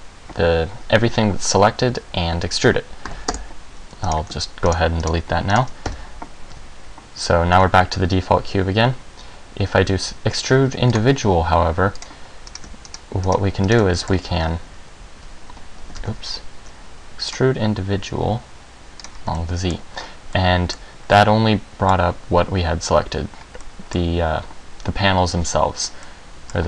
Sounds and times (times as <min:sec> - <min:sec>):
Speech: 0:00.4 - 0:02.9, 0:04.0 - 0:05.7, 0:07.2 - 0:09.0, 0:09.6 - 0:12.0, 0:13.1 - 0:14.6, 0:16.0 - 0:16.5, 0:17.2 - 0:18.5, 0:19.3 - 0:23.3, 0:23.9 - 0:26.6.